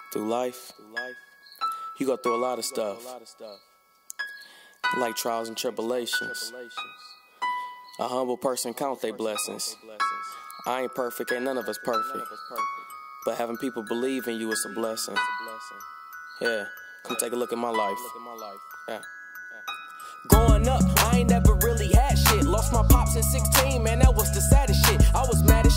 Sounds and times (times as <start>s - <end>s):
Chime: 0.0s - 25.7s
Glockenspiel: 0.0s - 25.7s
Marimba, xylophone: 9.2s - 25.7s.